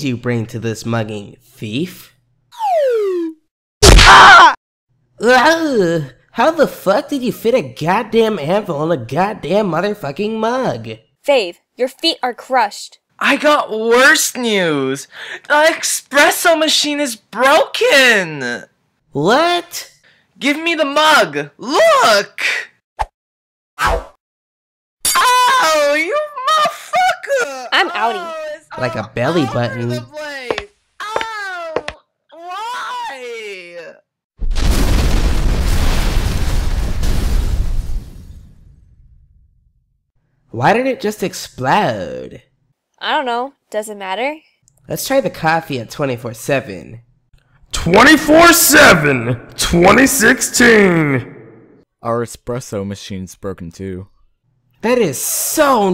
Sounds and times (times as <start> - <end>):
Whack, thwack: 3.8 - 4.4.